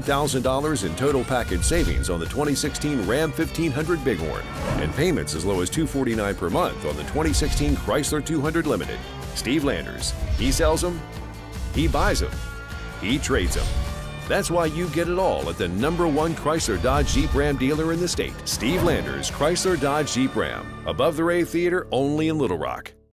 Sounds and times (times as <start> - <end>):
Speech: 0.0 - 11.0, 11.8 - 12.4, 13.0 - 13.7, 14.3 - 23.0
Music: 0.0 - 23.1.